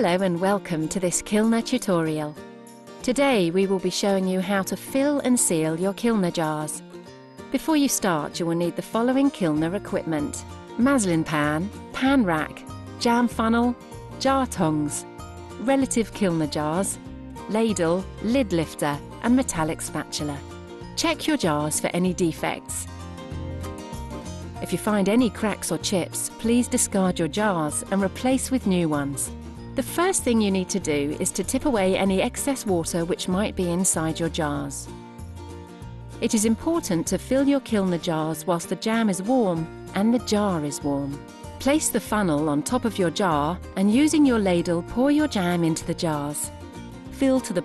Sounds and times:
Speech: 0.0 - 2.3, 3.1 - 6.8, 7.6 - 15.0, 15.6 - 20.4, 21.0 - 22.9, 24.6 - 34.9, 36.2 - 46.5, 47.2 - 47.6
Music: 0.0 - 47.6.

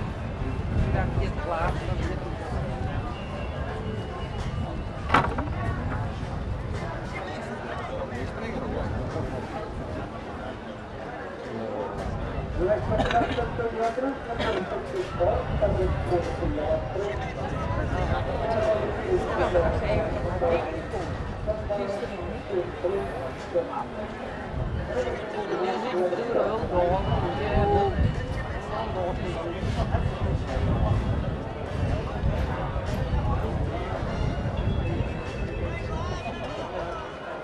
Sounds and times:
Inside, public space: 0.0 - 37.4
Speech: 0.0 - 37.4.

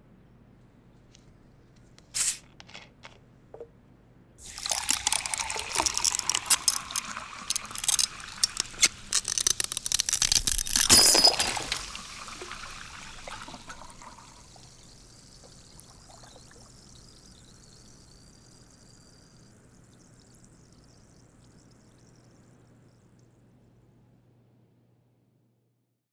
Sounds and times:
Pour: 4.4 - 22.6
Water: 4.4 - 23.3
Glass: 4.6 - 12.6.

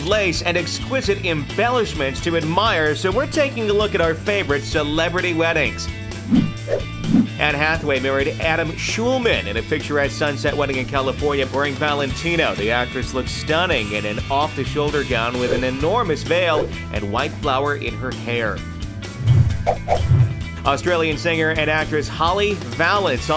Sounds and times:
Speech: 0.0 - 5.9, 7.4 - 18.7, 20.6 - 23.3
Music: 0.0 - 23.3.

